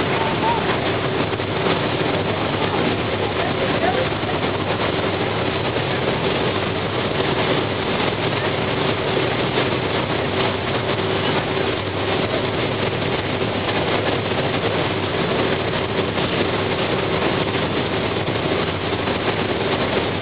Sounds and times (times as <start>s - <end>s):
Motorboat, speedboat: 0.0s - 20.2s.